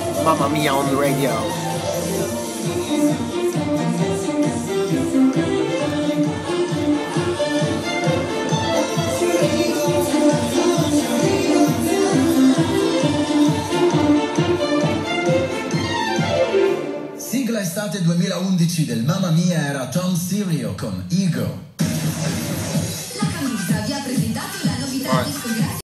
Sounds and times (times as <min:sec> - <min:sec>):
Music: 0:00.0 - 0:19.0, 0:21.6 - 0:25.8
Speech: 0:00.2 - 0:01.5, 0:17.2 - 0:21.6, 0:23.2 - 0:25.8
Radio: 0:00.3 - 0:01.5, 0:24.9 - 0:25.6.